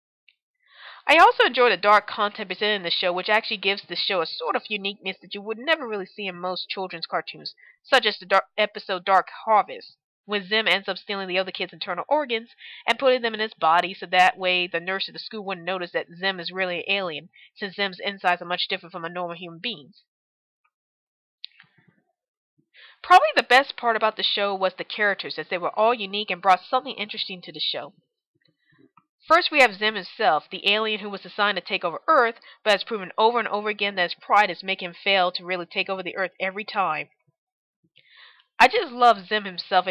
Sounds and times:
Narration, monologue: 0.8 - 20.0, 22.8 - 37.4, 38.0 - 39.9.

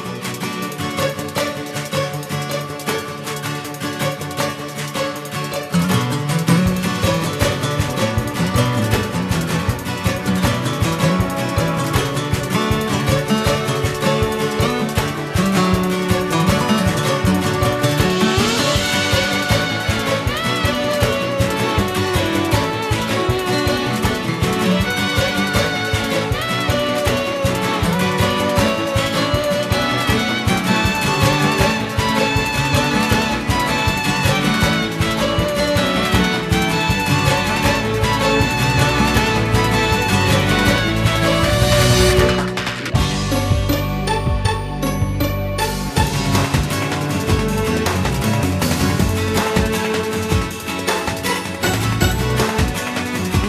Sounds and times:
Music: 0.0 - 53.4.

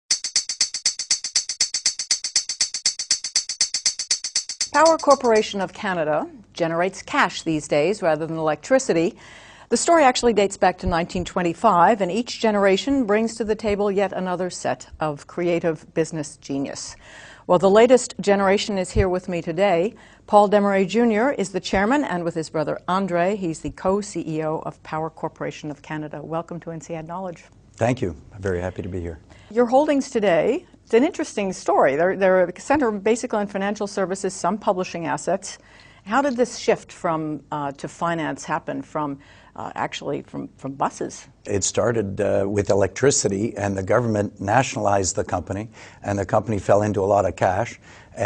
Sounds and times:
Music: 0.1 - 5.6.

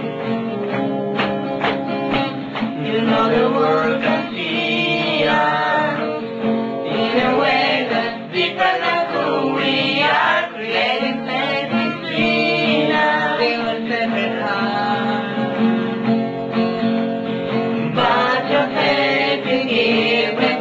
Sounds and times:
Music: 0.0 - 20.6.

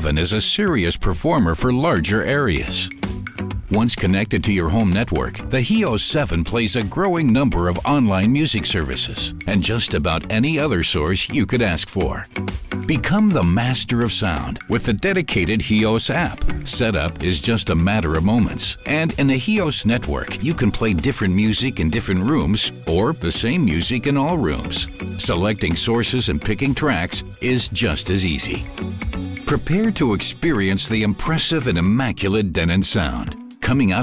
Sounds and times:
Speech: 0.0 - 2.9, 3.7 - 12.3, 12.9 - 28.7, 29.5 - 34.0
Music: 0.0 - 34.0.

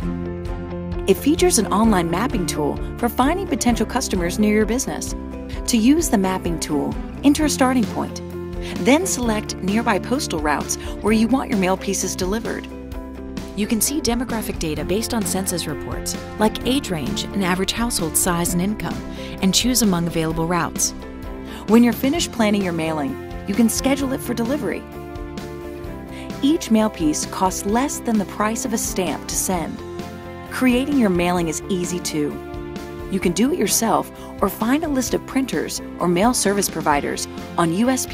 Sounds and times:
Music: 0.0 - 38.1
Speech: 1.1 - 12.7, 13.6 - 20.9, 21.6 - 24.8, 26.4 - 29.8, 30.5 - 32.4, 33.1 - 38.1.

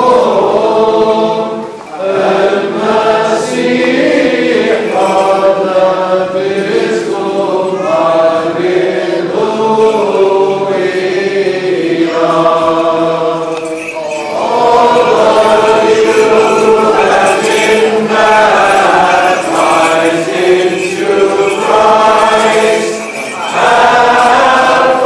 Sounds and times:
Chant: 0.0 - 25.0.

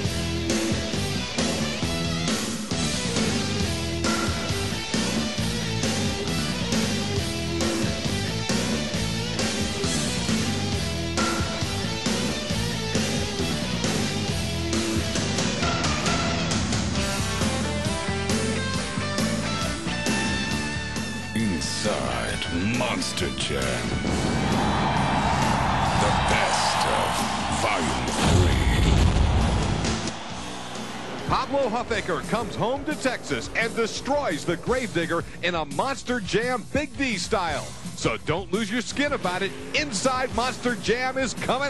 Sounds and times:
Music: 0.0 - 41.7.

